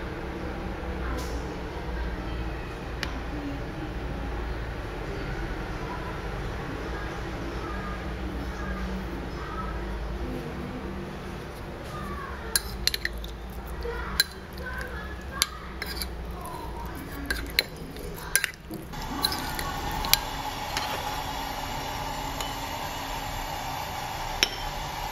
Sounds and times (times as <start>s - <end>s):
Speech: 0.5s - 20.2s.